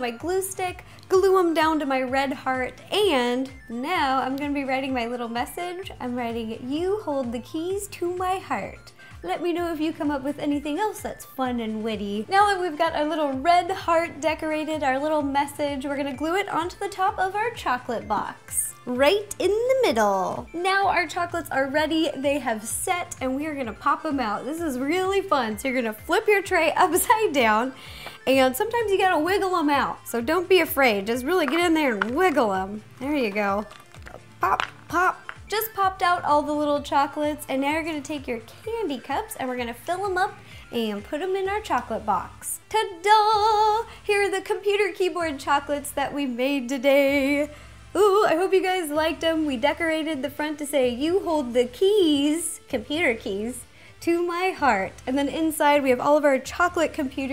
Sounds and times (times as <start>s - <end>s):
Speech: 0.0s - 27.7s, 28.3s - 33.7s
Music: 0.0s - 57.3s.